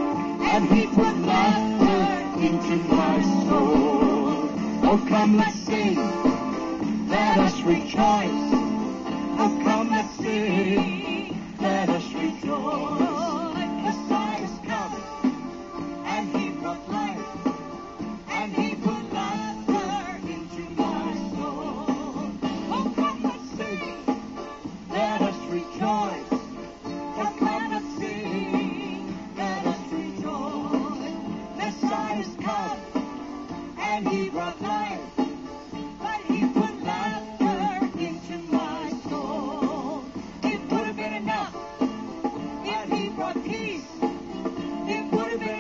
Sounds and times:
Music: 0.0s - 45.6s
Female singing: 0.4s - 6.2s, 16.1s - 17.2s, 18.3s - 24.0s, 27.2s - 32.8s, 33.8s - 35.1s, 36.0s - 41.6s, 42.6s - 43.9s, 44.9s - 45.6s
Male singing: 0.4s - 6.4s, 7.1s - 8.7s, 9.4s - 15.0s, 16.0s - 17.2s, 18.3s - 24.0s, 24.9s - 26.5s, 27.2s - 28.8s, 29.4s - 32.9s, 33.8s - 35.2s, 36.0s - 41.6s, 44.9s - 45.6s.

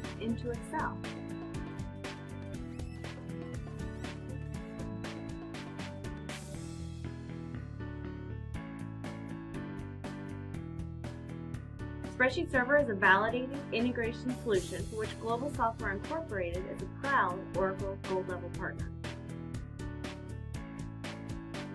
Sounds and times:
Music: 0.0s - 21.7s
Speech: 0.2s - 1.0s, 12.2s - 18.9s.

